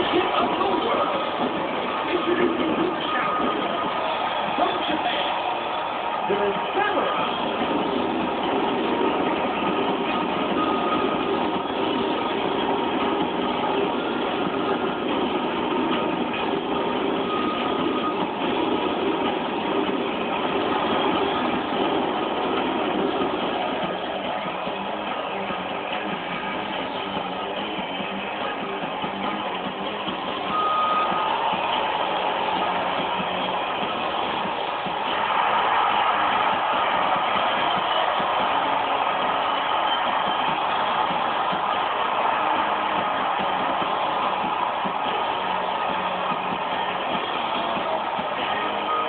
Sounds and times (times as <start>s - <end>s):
Speech: 0.0s - 3.7s, 4.5s - 5.4s, 6.3s - 7.3s
Music: 0.0s - 49.0s.